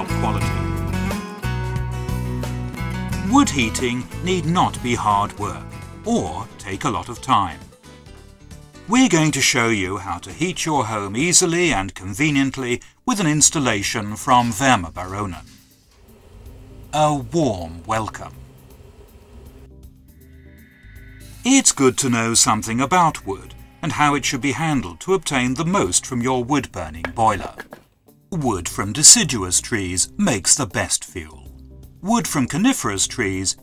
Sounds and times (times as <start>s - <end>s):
Speech: 0.0s - 0.6s, 3.2s - 7.7s, 8.9s - 15.6s, 16.9s - 18.4s, 21.5s - 27.7s, 28.3s - 33.6s
Music: 0.0s - 33.6s.